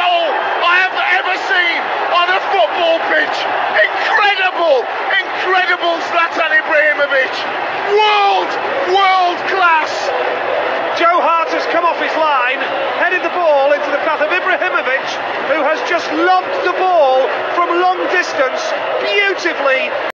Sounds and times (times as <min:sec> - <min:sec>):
Speech: 0:00.0 - 0:10.2, 0:10.9 - 0:20.1.